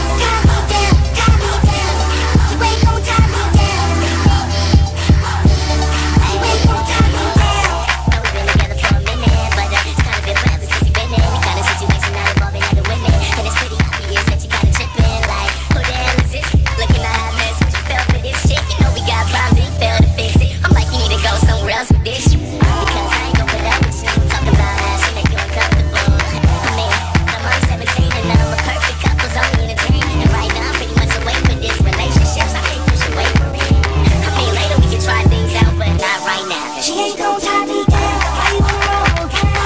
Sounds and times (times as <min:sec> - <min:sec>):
Music: 0:00.0 - 0:39.6.